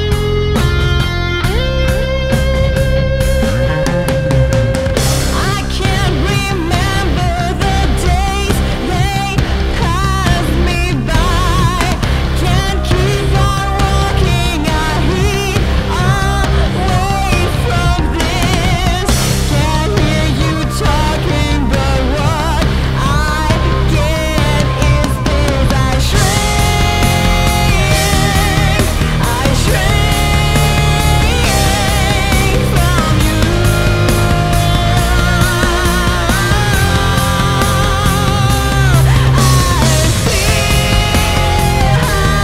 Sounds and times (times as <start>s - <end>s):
Music: 0.0s - 42.4s
Singing: 5.0s - 42.4s.